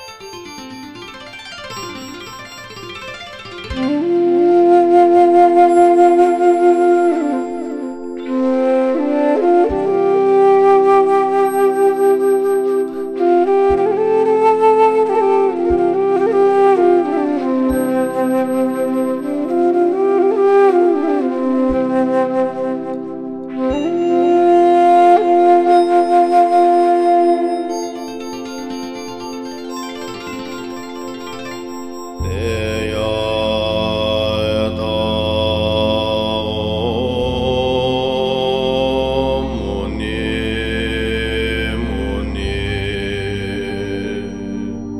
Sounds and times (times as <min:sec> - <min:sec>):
Mantra: 0:32.2 - 0:44.9.